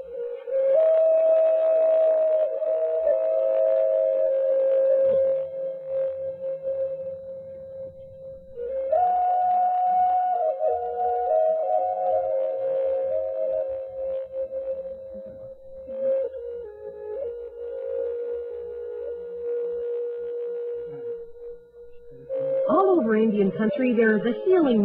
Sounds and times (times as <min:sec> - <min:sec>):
Inside, small room: 0:00.0 - 0:24.8
Music: 0:00.0 - 0:24.8.